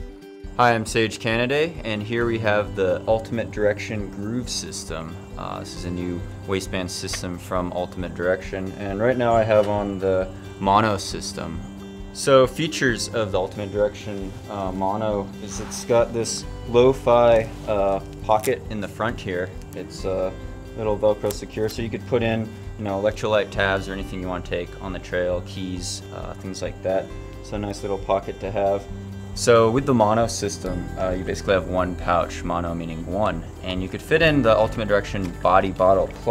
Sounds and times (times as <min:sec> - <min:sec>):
Music: 0:00.0 - 0:36.3
Male speech, man speaking: 0:00.6 - 0:36.3.